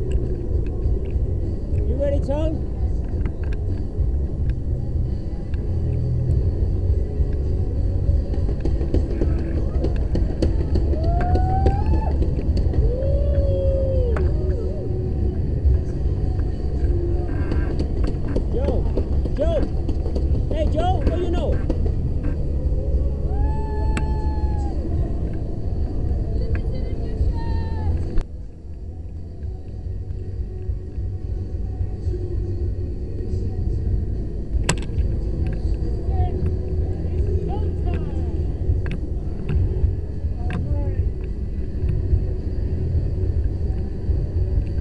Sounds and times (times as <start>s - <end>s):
Speech: 1.8s - 2.6s, 20.5s - 21.6s.